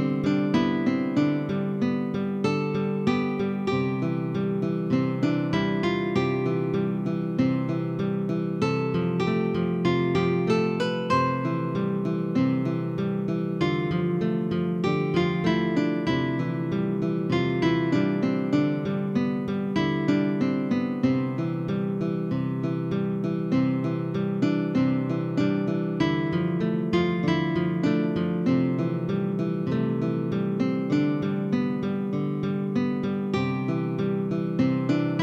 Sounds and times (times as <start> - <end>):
Music: 0.0 - 35.2.